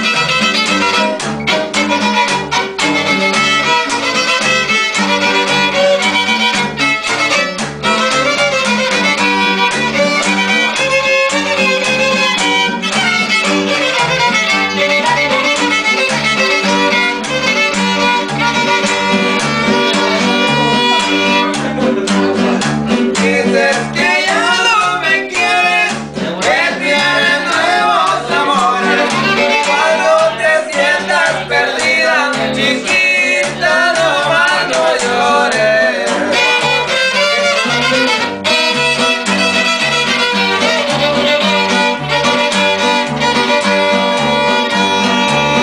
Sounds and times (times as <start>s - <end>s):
Violin, fiddle: 0.0s - 21.7s, 28.7s - 30.3s, 36.3s - 45.6s.